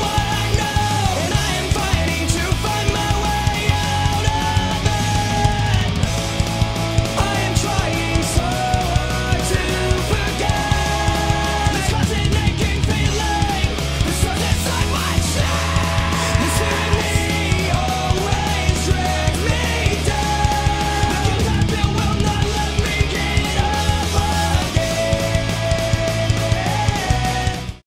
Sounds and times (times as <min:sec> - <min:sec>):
Exciting music: 0:00.0 - 0:27.8.